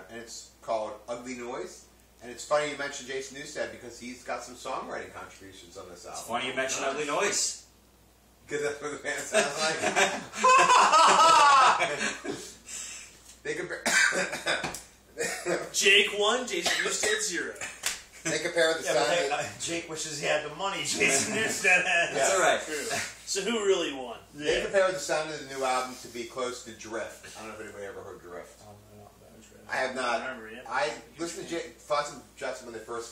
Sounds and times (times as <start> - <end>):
Speech: 0.0 - 7.7, 13.4 - 13.9, 15.4 - 17.6, 18.3 - 33.1.